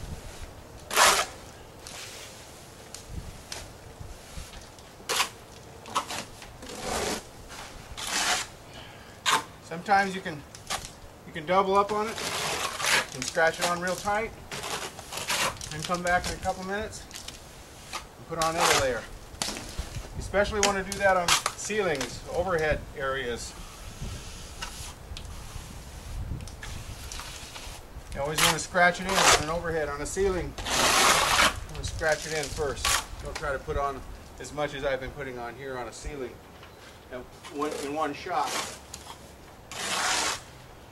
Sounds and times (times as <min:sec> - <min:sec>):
Outside, rural or natural: 0:00.0 - 0:40.9
Speech: 0:13.2 - 0:14.3, 0:15.7 - 0:17.0, 0:18.3 - 0:19.1, 0:20.2 - 0:23.6, 0:28.2 - 0:30.6, 0:31.7 - 0:36.4, 0:37.1 - 0:38.6.